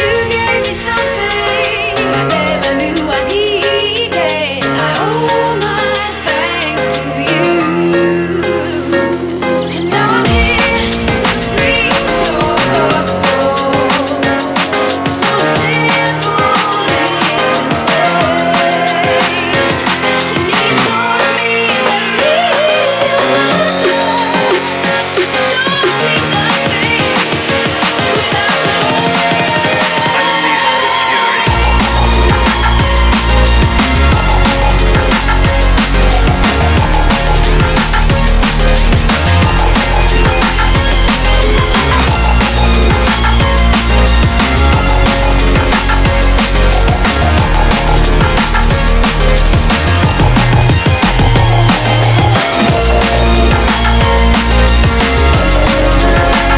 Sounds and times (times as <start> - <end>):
Dubstep: 0.0 - 56.5.